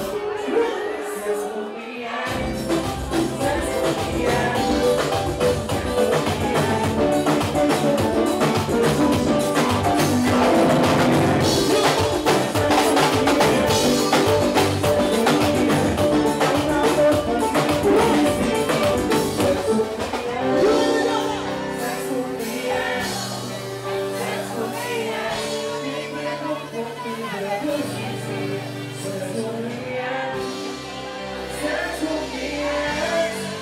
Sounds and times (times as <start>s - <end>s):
Music: 0.0s - 33.6s.